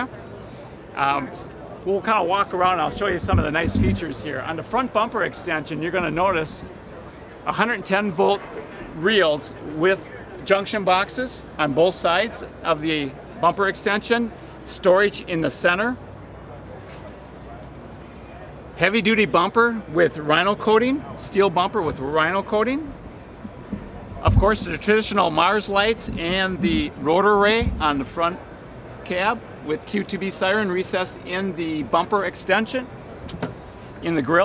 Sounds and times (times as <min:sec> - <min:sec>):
Speech: 0:00.9 - 0:06.8, 0:07.4 - 0:23.0, 0:24.2 - 0:32.9, 0:34.0 - 0:34.4.